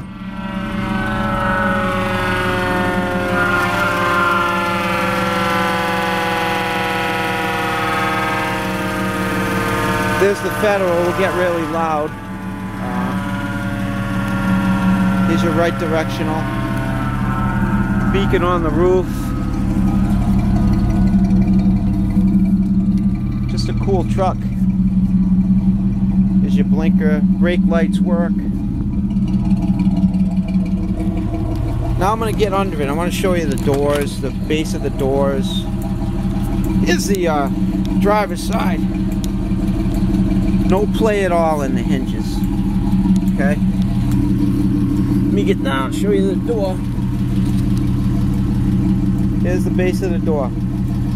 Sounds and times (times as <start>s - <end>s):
Vehicle: 0.0s - 51.1s
Speech: 10.2s - 12.1s, 15.3s - 16.4s, 18.1s - 19.2s, 23.5s - 24.5s, 26.4s - 28.4s, 32.0s - 35.6s, 36.8s - 38.8s, 40.7s - 42.4s, 43.4s - 43.6s, 45.3s - 46.8s, 49.4s - 50.5s.